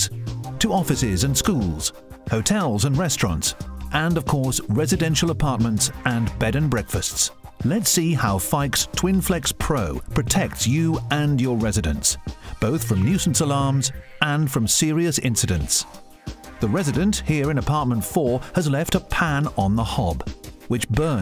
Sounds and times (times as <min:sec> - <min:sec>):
Speech: 0:00.0 - 0:16.0, 0:16.6 - 0:21.2
Music: 0:00.0 - 0:21.2.